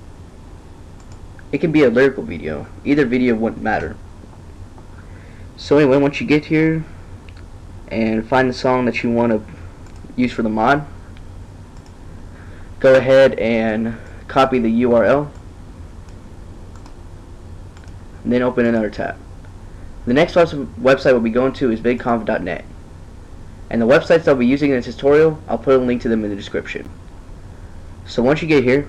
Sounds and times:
Speech: 1.5s - 4.0s, 5.6s - 6.9s, 7.9s - 9.6s, 10.2s - 11.0s, 12.8s - 15.4s, 18.2s - 19.2s, 20.1s - 22.7s, 23.7s - 26.9s, 28.1s - 28.8s.

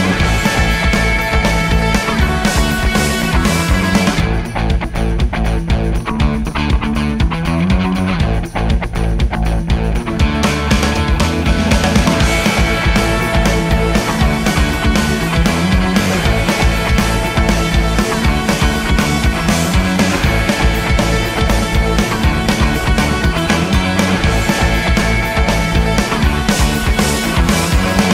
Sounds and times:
Music: 0.0s - 28.1s.

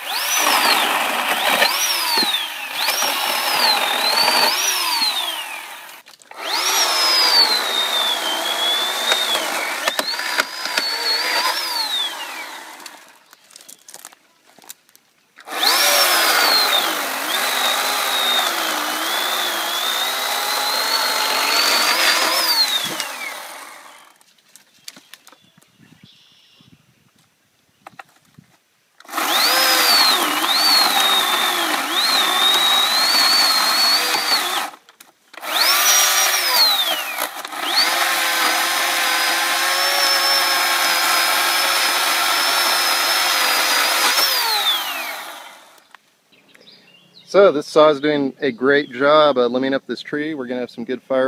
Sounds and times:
Chainsaw: 0.0s - 13.2s, 15.4s - 24.2s, 29.0s - 45.9s
Outside, rural or natural: 0.0s - 51.2s.

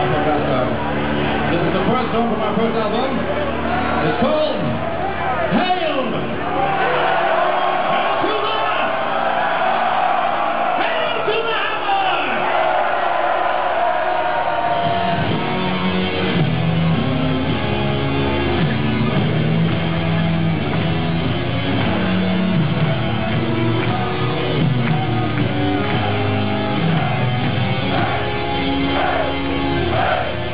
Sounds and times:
Music: 0.0s - 10.8s, 11.4s - 30.5s.

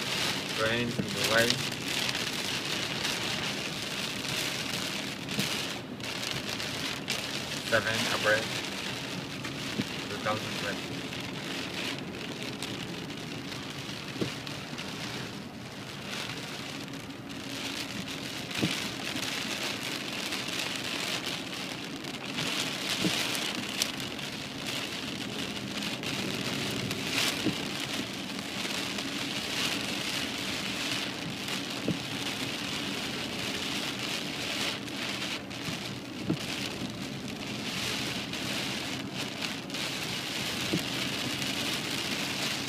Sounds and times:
Rain on surface: 0.0s - 42.6s.

